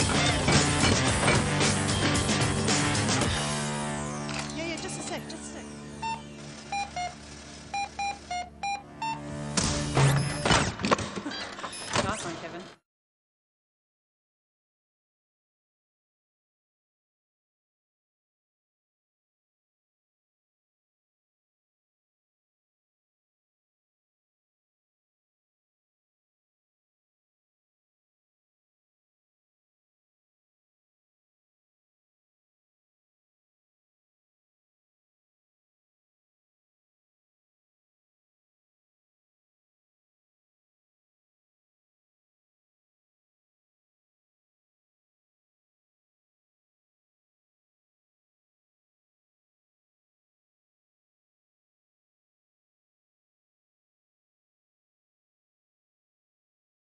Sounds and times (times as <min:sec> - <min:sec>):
Speech: 0:04.6 - 0:05.7, 0:12.0 - 0:12.8.